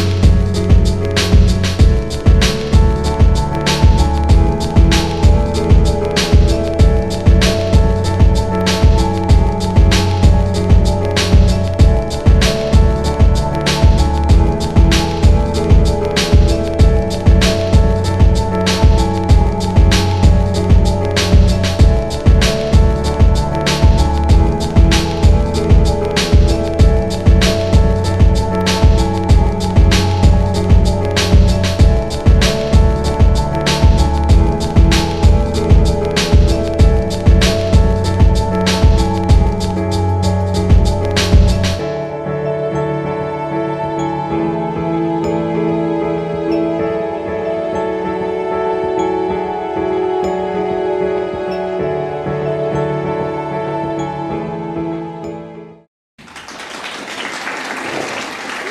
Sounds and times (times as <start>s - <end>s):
Background music: 0.0s - 55.9s.